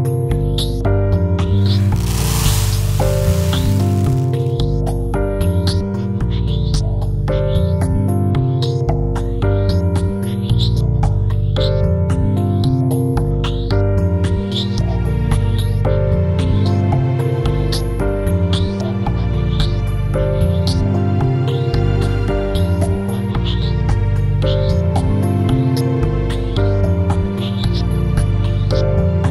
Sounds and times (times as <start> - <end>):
Music: 0.0 - 29.3.